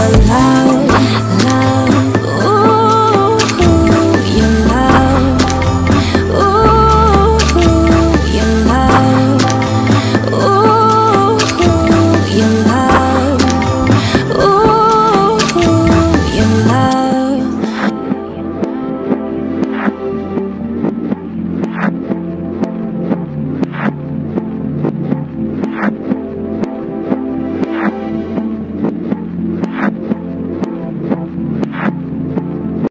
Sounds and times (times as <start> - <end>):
Synthesizer: 0.0 - 32.9.